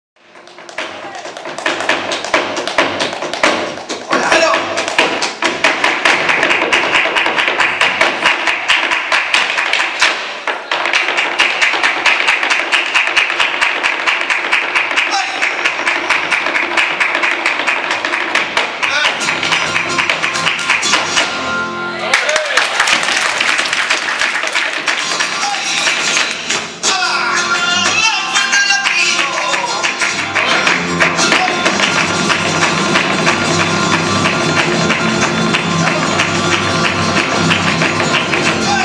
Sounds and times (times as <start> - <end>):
Speech: 4.1 - 4.7.